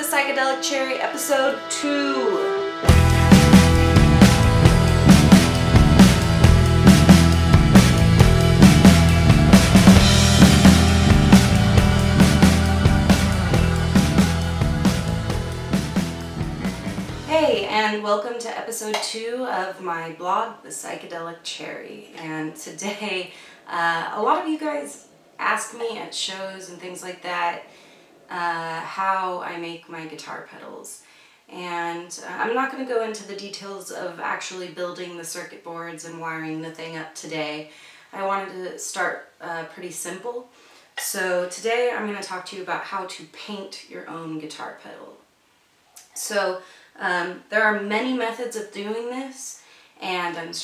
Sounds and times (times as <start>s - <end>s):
Speech: 0.0s - 2.6s, 17.2s - 27.6s, 28.3s - 45.2s, 46.0s - 50.6s.